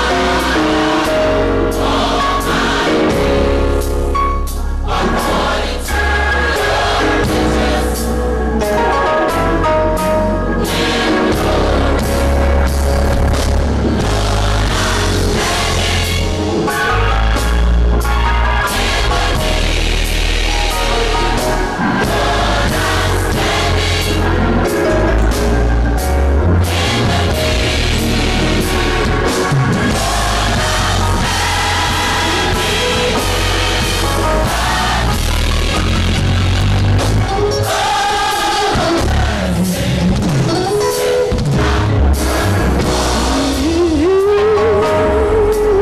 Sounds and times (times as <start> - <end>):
Gospel music: 0.0 - 45.8.